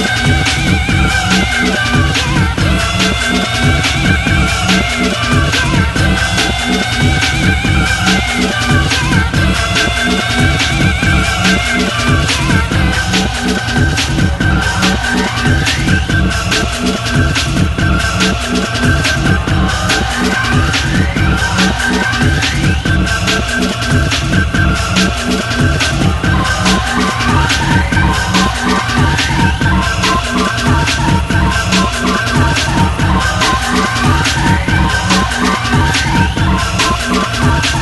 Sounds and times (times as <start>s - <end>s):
Music: 0.0s - 37.8s.